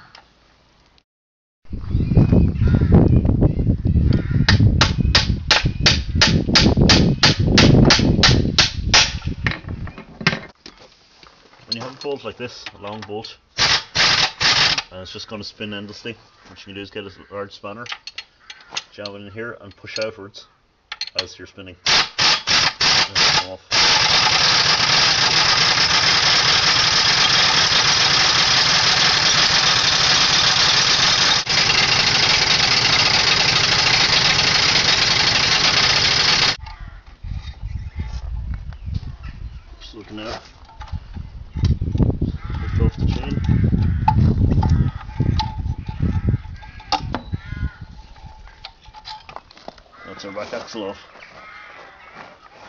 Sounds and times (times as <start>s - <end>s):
Engine: 13.6s - 14.9s, 22.0s - 36.6s.